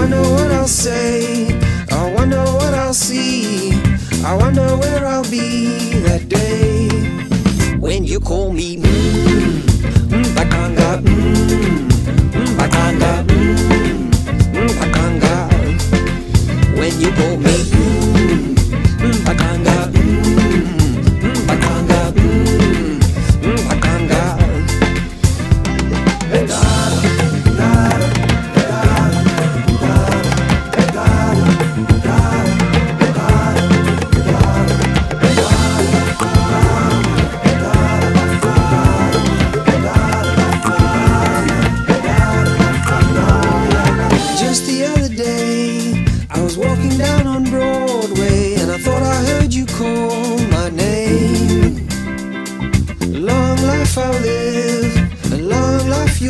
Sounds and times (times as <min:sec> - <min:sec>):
Music of Africa: 0:00.0 - 0:07.9, 0:08.8 - 0:56.2.